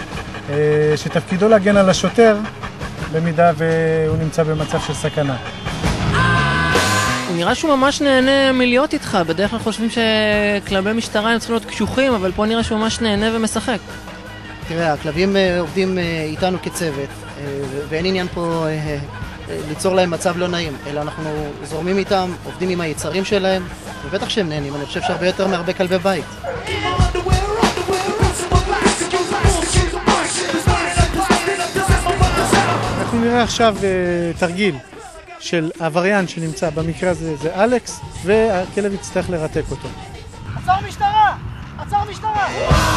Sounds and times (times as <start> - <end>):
Music: 0.0 - 42.9
Speech: 0.5 - 2.5, 3.1 - 5.4, 7.3 - 13.8, 14.6 - 27.0, 33.0 - 39.9, 40.6 - 42.7.